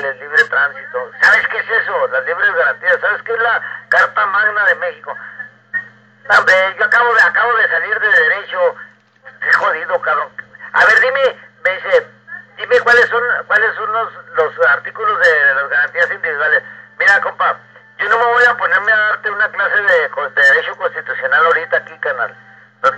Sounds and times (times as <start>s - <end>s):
Radio: 0.0s - 22.9s
Speech: 6.3s - 22.9s.